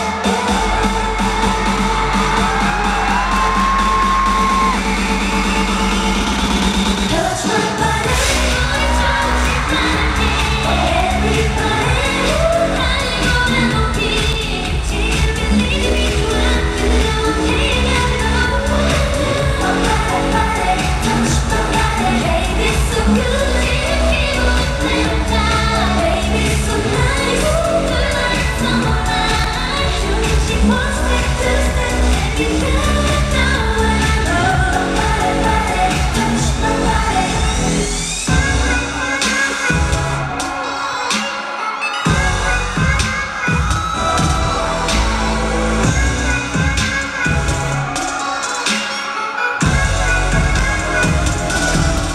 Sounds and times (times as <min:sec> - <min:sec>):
Dance music: 0:00.0 - 0:52.1.